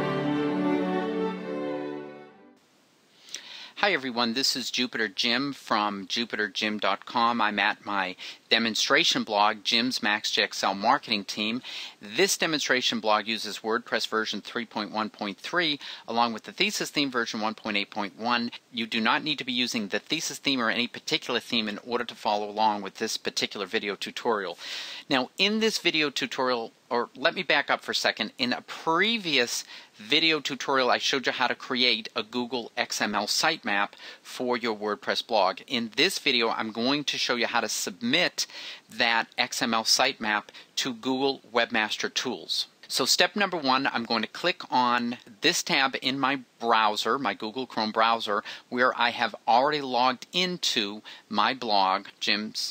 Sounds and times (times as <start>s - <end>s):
Speech: 3.8s - 52.7s.